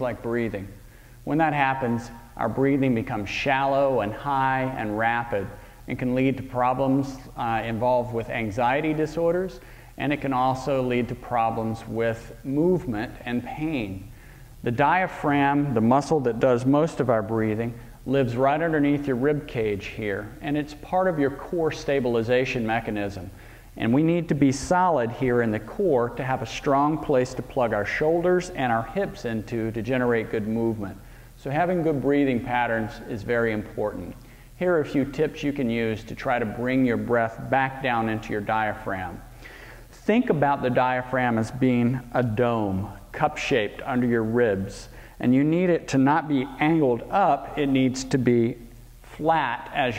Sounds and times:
Speech: 0.0 - 39.3, 40.0 - 49.9.

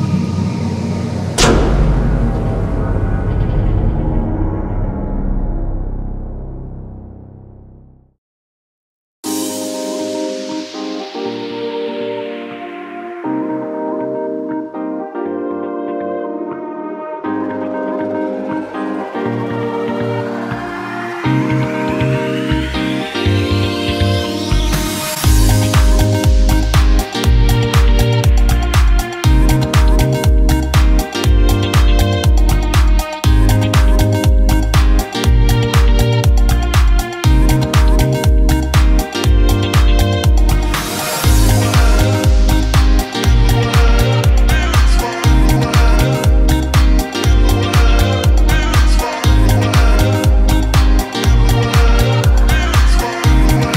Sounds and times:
Music: 0.0 - 8.2, 9.2 - 53.7.

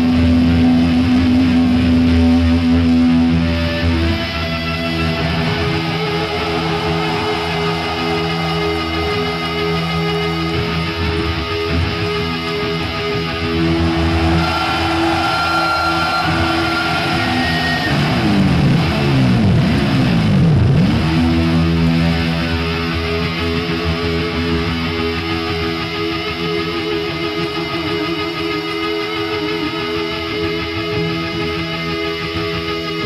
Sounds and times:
Heavy metal: 0.0 - 33.0.

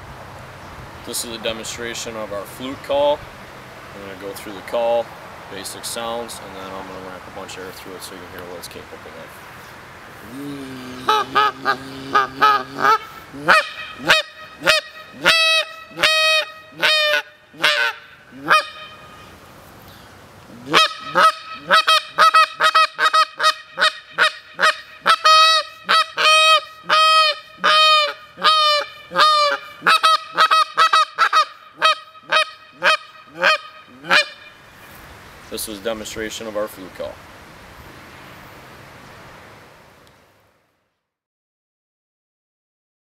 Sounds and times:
Honk: 20.7 - 34.4.

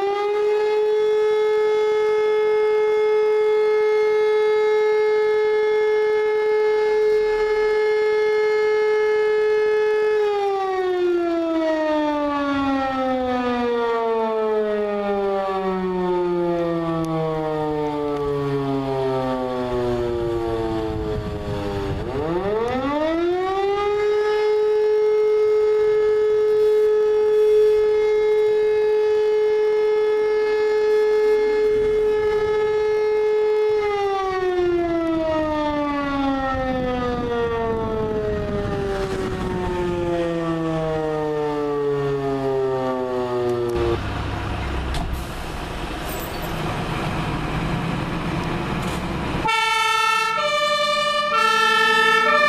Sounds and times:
Siren: 0.0 - 46.7, 48.1 - 52.4.

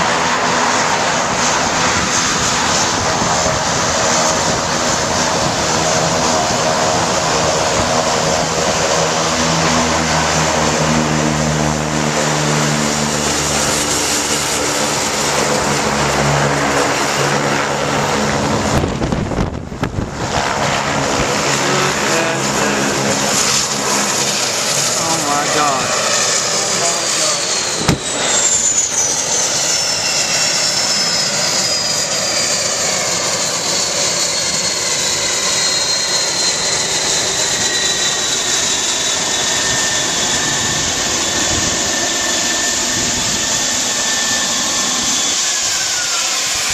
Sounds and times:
Propeller, airscrew: 0.0 - 46.7
Speech: 21.6 - 23.1, 25.0 - 26.0, 26.6 - 27.5.

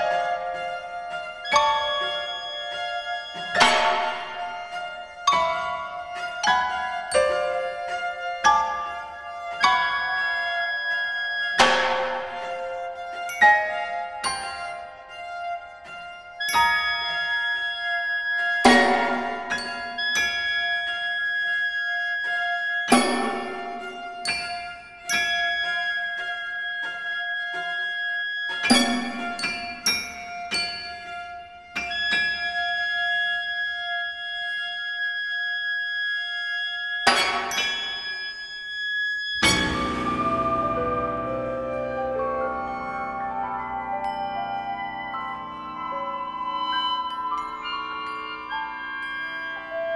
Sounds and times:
Percussion: 0.0 - 49.9.

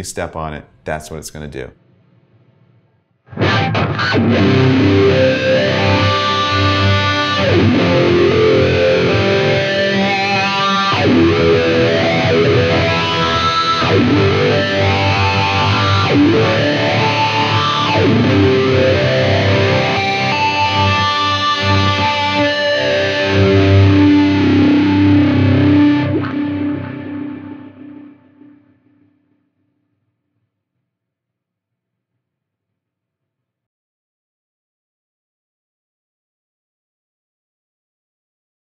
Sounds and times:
Music: 2.8 - 30.9.

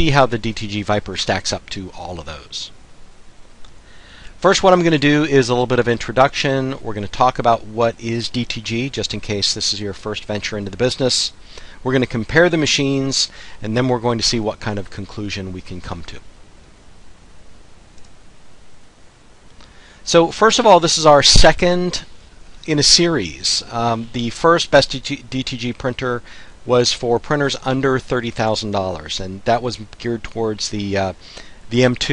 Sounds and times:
Speech: 0.0 - 2.8, 4.4 - 16.3, 20.0 - 32.1.

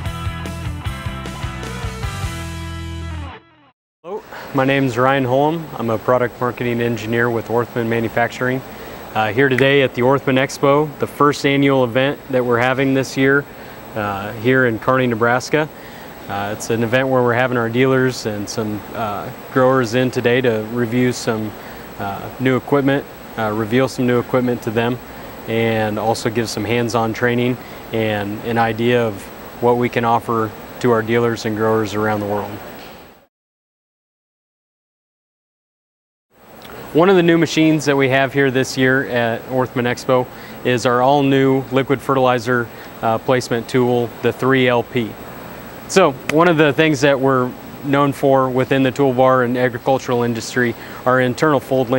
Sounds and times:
Speech: 4.1 - 15.7, 16.3 - 32.6, 36.9 - 45.2, 45.9 - 51.9.

